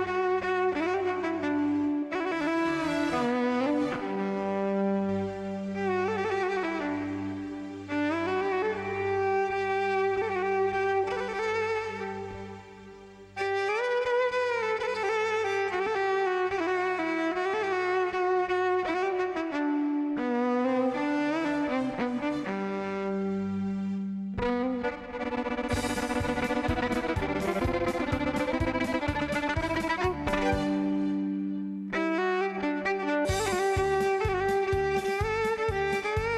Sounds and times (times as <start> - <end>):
Violin, fiddle: 0.0 - 36.3.